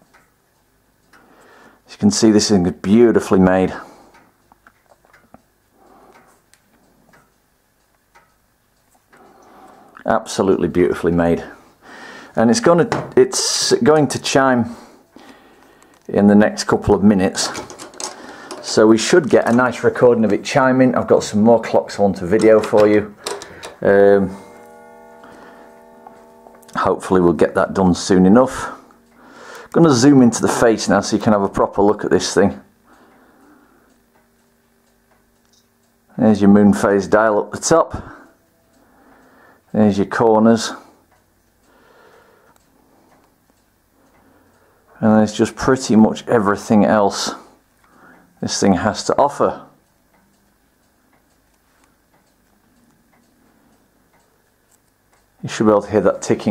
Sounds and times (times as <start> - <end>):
Clock: 0.0 - 56.5
Speech: 1.9 - 3.9, 10.0 - 11.6, 12.4 - 14.8, 16.1 - 17.7, 18.6 - 23.2, 23.8 - 24.4, 26.7 - 28.9, 29.7 - 32.7, 36.1 - 38.3, 39.7 - 40.9, 45.0 - 47.6, 48.4 - 49.8, 55.4 - 56.5.